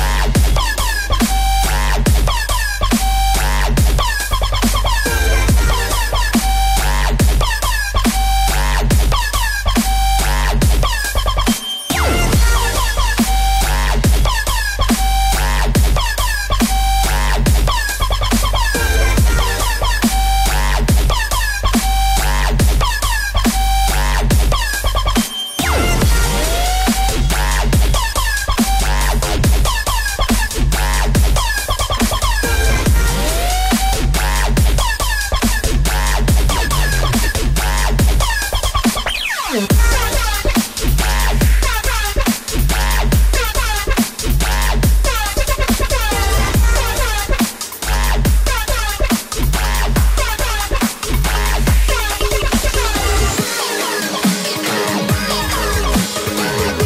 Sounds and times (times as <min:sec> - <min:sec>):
Dubstep: 0:00.0 - 0:56.8.